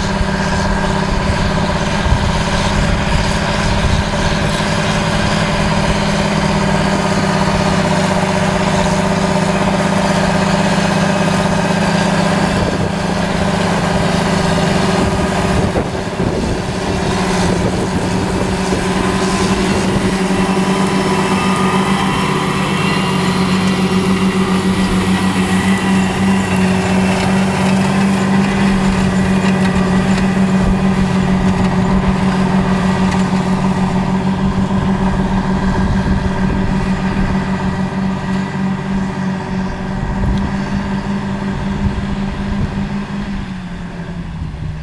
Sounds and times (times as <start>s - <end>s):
Accelerating, revving, vroom: 0.0s - 43.6s
Clatter: 0.0s - 44.8s
Vehicle: 0.0s - 44.8s.